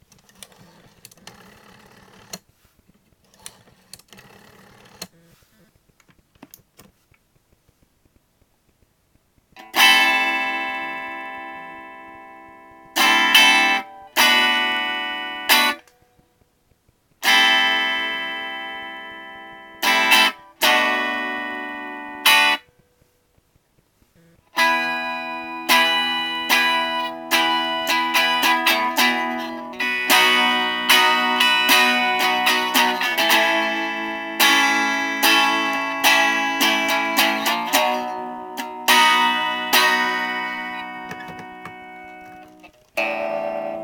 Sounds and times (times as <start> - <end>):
Acoustic guitar: 17.3 - 43.8.